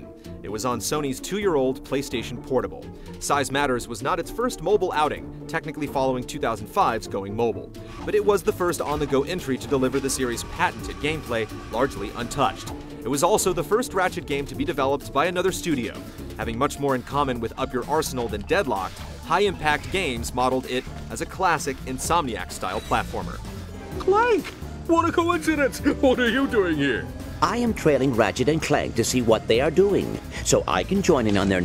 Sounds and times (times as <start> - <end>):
Speech: 0.0 - 23.4, 24.0 - 31.6
Music: 0.0 - 31.6.